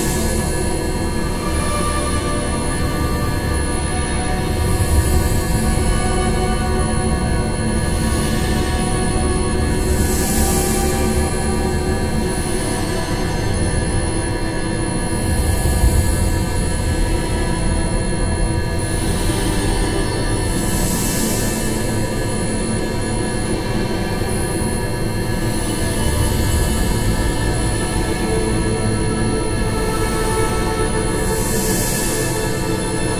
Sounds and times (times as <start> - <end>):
Scary music: 0.0 - 33.1.